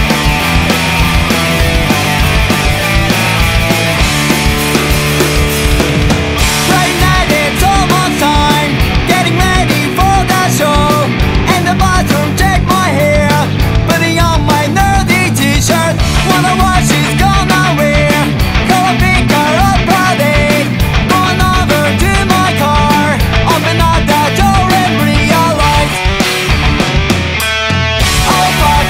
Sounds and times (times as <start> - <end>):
Music: 0.0 - 28.9.